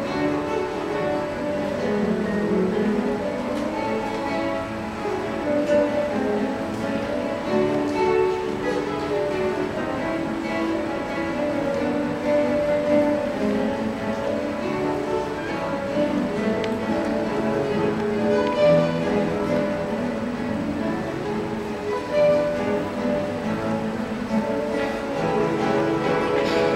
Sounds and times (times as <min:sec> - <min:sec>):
Acoustic guitar: 0:00.0 - 0:26.7
Orchestra: 0:00.0 - 0:26.7
Strum: 0:00.0 - 0:26.7.